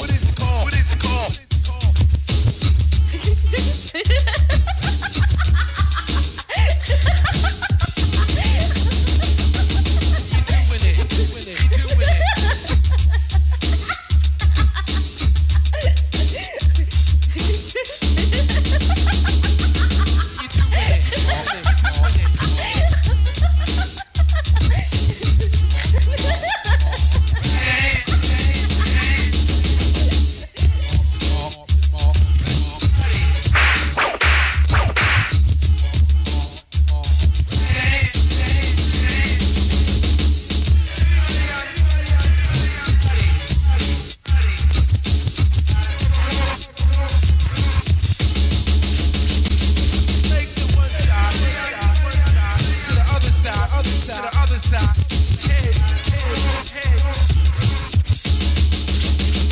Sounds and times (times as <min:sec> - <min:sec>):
Hip hop music: 0:00.0 - 0:59.5.